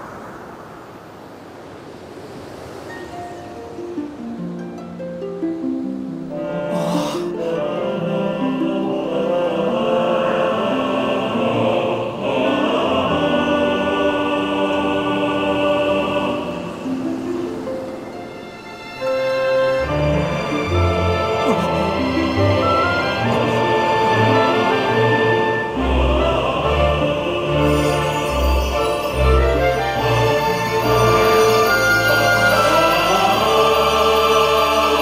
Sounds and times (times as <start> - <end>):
Opera: 5.4 - 35.0.